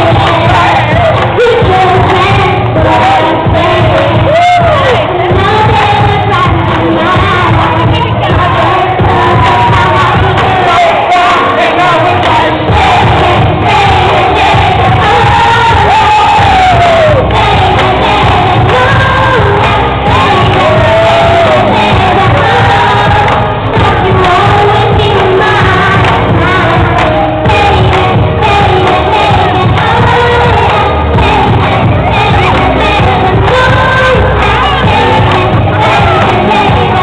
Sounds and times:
Child singing: 0.0s - 37.0s
Music: 0.0s - 37.0s.

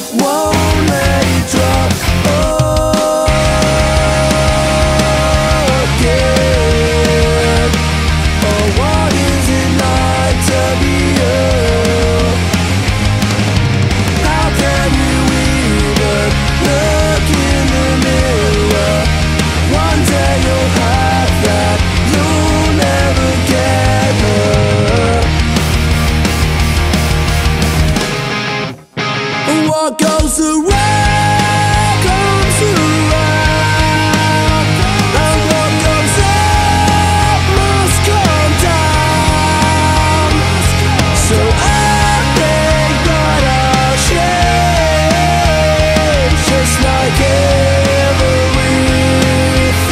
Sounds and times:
Blues: 0.0s - 49.9s
Soul music: 0.0s - 49.9s.

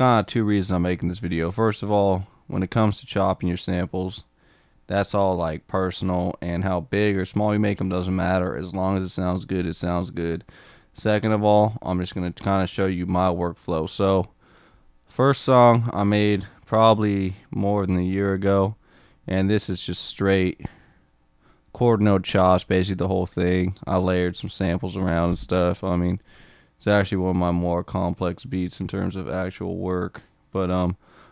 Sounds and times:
Speech: 0.0s - 4.3s, 4.9s - 14.3s, 15.1s - 20.8s, 21.8s - 26.2s, 26.8s - 31.0s.

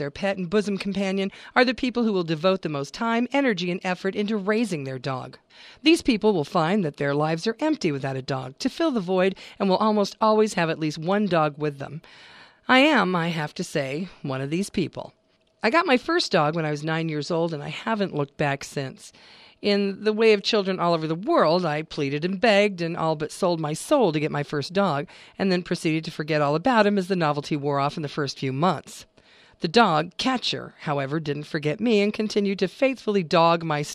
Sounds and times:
Speech: 0.0s - 12.0s, 12.7s - 33.9s.

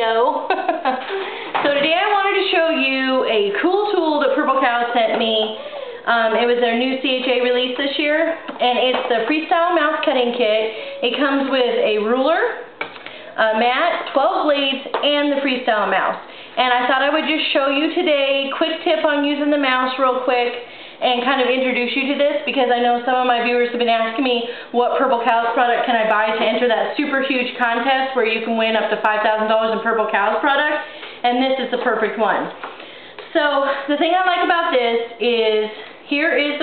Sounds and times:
Speech: 0.0s - 0.5s, 1.6s - 12.7s, 13.4s - 32.6s, 33.3s - 36.6s.

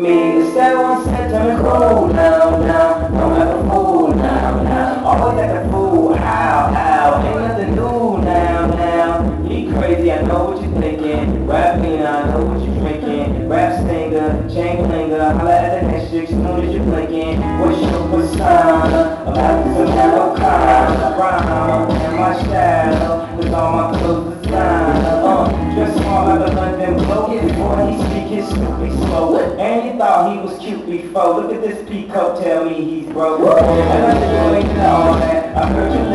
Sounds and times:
Music of Latin America: 0.0s - 30.9s, 33.1s - 36.1s.

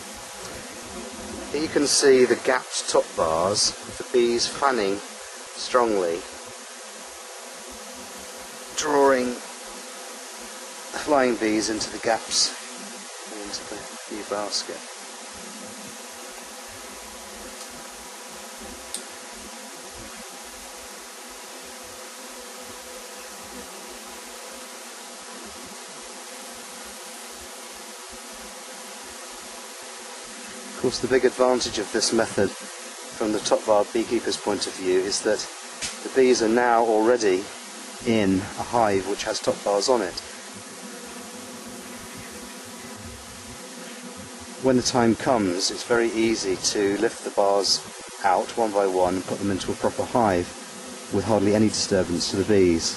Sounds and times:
Bee, wasp, etc.: 0.0s - 52.9s
Fly, housefly: 0.0s - 52.9s.

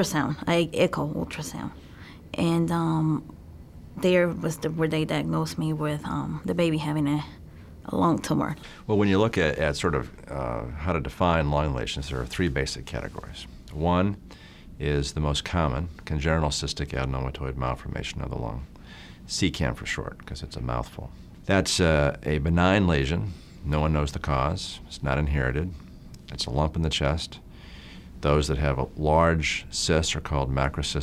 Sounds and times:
Speech: 7.9s - 14.2s, 14.8s - 18.7s, 19.3s - 27.4s, 28.2s - 31.0s.

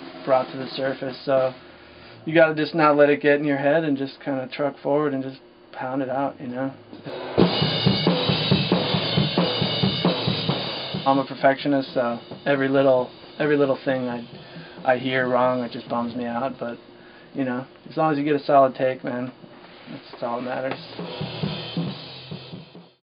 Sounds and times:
Music: 0.0s - 2.1s, 7.0s - 17.4s, 20.2s - 23.0s
Speech: 0.2s - 1.6s, 2.2s - 6.8s, 11.1s - 16.8s, 17.4s - 21.0s.

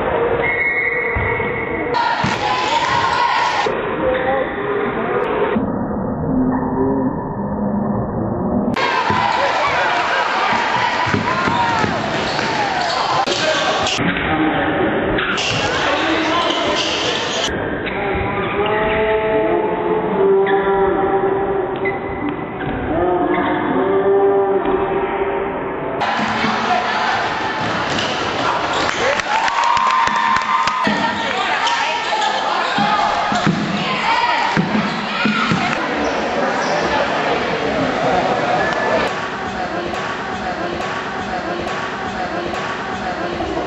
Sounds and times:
Speech: 1.9s - 5.4s, 8.8s - 20.8s, 30.8s - 43.6s
Basketball bounce: 10.5s - 12.5s.

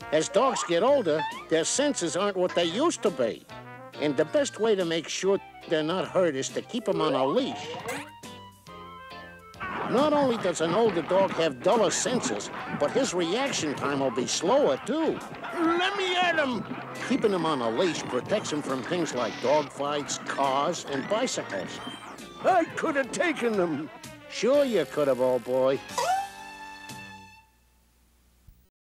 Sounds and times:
Music: 0.0s - 27.9s
Speech: 0.1s - 3.4s, 4.0s - 7.8s, 9.9s - 21.8s, 22.4s - 25.8s.

